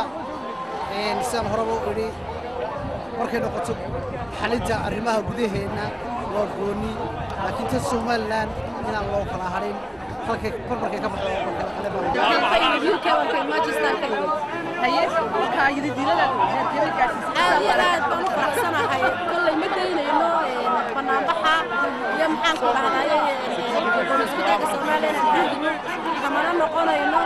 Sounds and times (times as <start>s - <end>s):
Outside, urban or manmade: 0.0s - 27.2s.